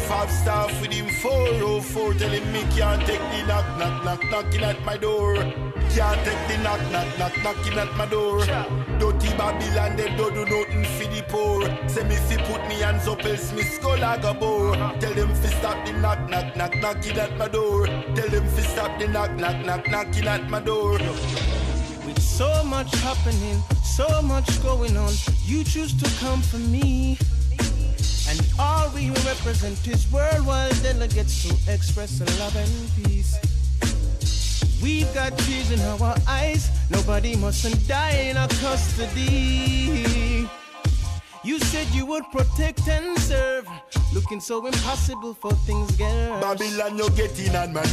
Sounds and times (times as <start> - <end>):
Music: 0.0 - 47.9.